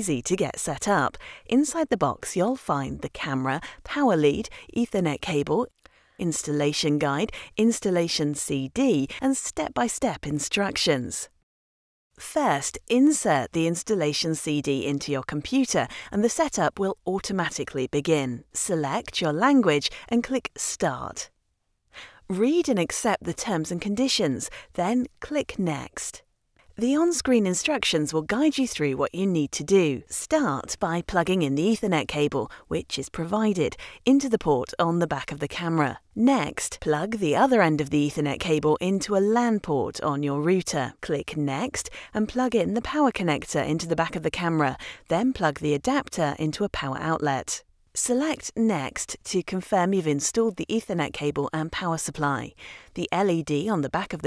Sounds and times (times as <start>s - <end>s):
Speech: 0.0s - 11.3s, 12.2s - 21.3s, 22.3s - 26.2s, 26.8s - 54.2s.